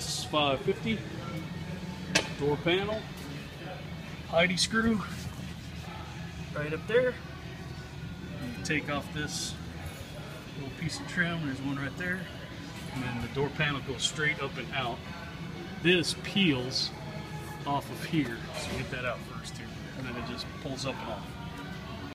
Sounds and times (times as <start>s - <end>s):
Music: 0.0s - 22.1s.